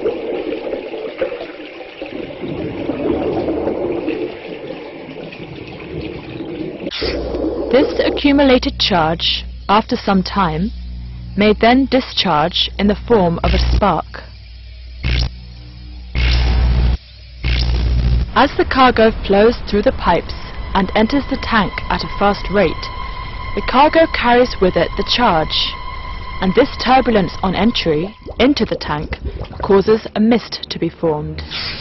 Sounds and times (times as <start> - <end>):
Speech: 7.7 - 10.7, 11.4 - 14.3, 18.4 - 22.9, 23.6 - 25.8, 26.4 - 31.4.